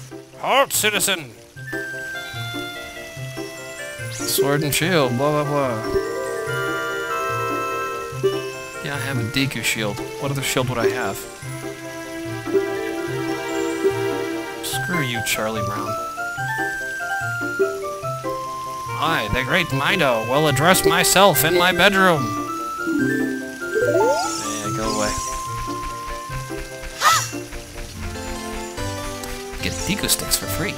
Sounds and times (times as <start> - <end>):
Music: 0.0 - 30.7
Speech: 0.4 - 1.4, 4.3 - 5.9, 8.9 - 11.3, 14.6 - 16.0, 19.0 - 22.4, 24.4 - 25.2, 29.6 - 30.7.